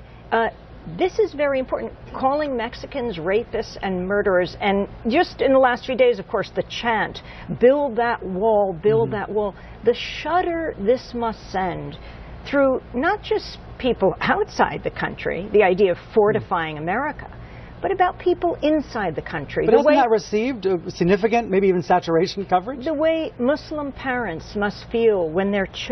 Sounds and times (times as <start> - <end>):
Speech: 0.3 - 25.9.